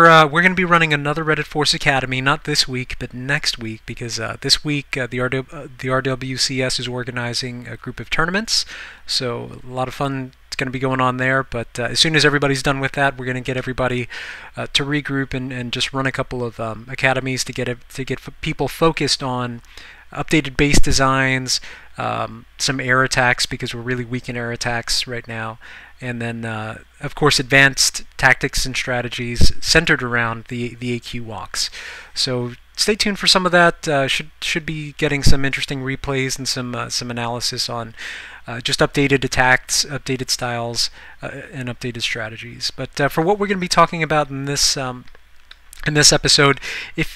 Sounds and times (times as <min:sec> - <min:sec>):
Speech: 0:00.0 - 0:45.2, 0:45.8 - 0:47.1.